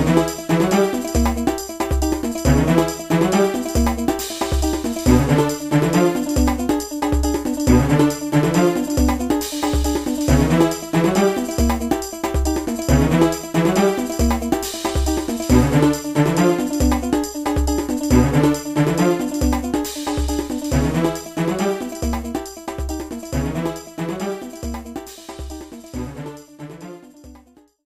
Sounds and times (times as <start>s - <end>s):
Music: 0.0s - 27.8s.